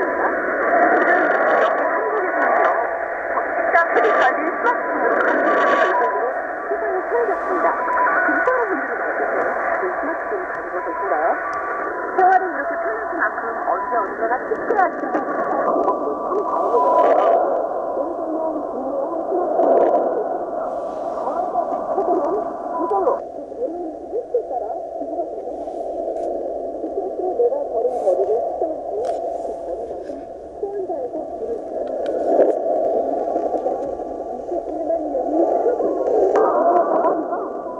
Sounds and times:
Speech: 0.0 - 11.5, 12.1 - 20.3, 21.1 - 25.8, 26.9 - 31.7, 33.0 - 37.8.

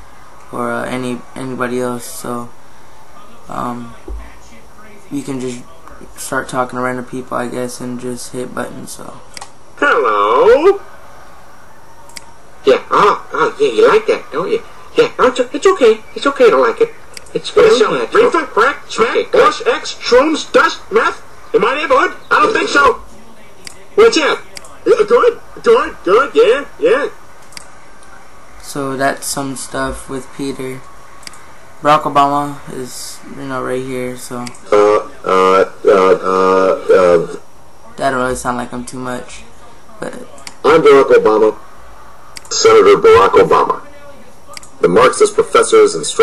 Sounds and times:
Speech: 0.4 - 10.8, 12.1 - 27.2, 27.9 - 30.9, 31.8 - 41.6, 42.5 - 46.2.

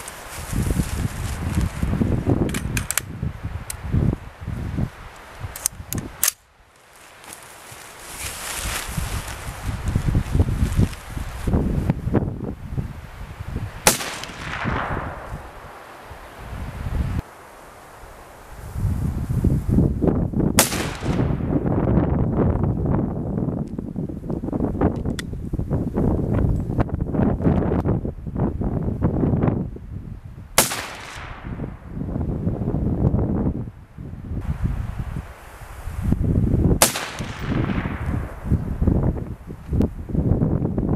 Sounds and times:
Rustling leaves: 0.0 - 40.9.

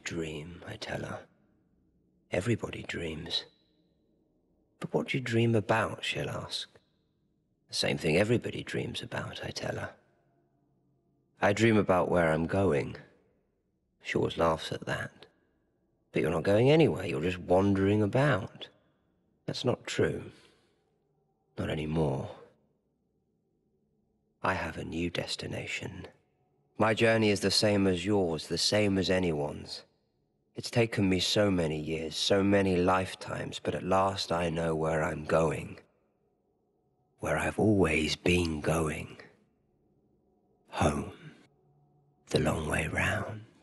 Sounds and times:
Male speech, man speaking: 0.0 - 1.3, 2.3 - 3.5, 4.8 - 6.8, 7.7 - 10.0, 11.4 - 13.1, 14.0 - 15.3, 16.2 - 18.7, 19.5 - 20.4, 21.6 - 22.5, 24.4 - 26.2, 26.8 - 29.9, 30.6 - 35.8, 37.2 - 39.3, 40.7 - 41.3, 42.3 - 43.6
Narration, monologue: 0.0 - 43.6.

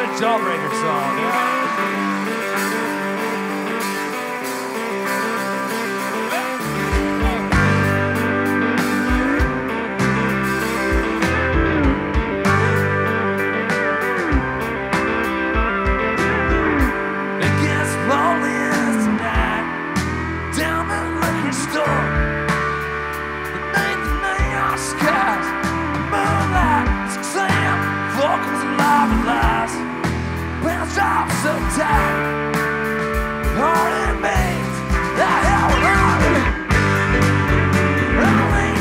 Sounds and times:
Exciting music: 0.0 - 38.8.

